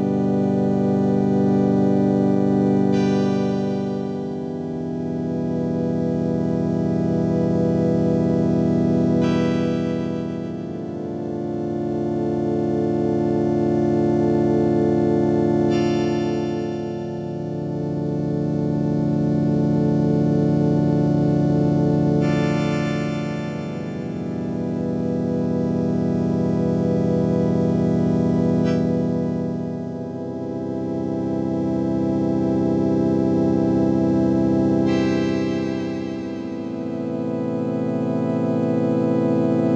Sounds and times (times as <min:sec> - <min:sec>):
Harmonic: 0:00.0 - 0:39.7
Music: 0:00.0 - 0:39.7.